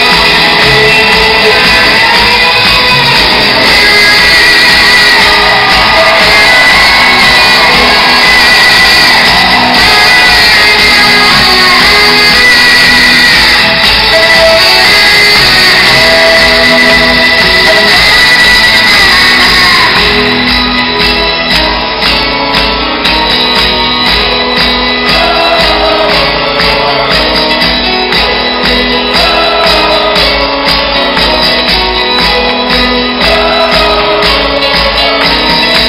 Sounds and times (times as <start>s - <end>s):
Rock music: 0.0s - 35.8s.